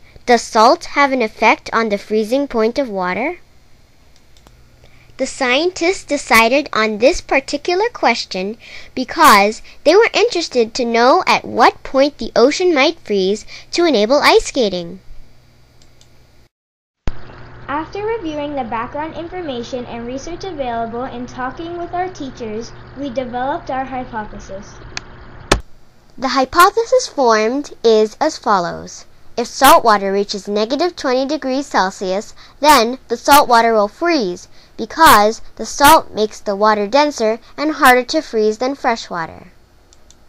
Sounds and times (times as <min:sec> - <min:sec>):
Speech: 0:00.3 - 0:03.4, 0:05.2 - 0:15.0, 0:17.7 - 0:24.8, 0:26.2 - 0:39.6.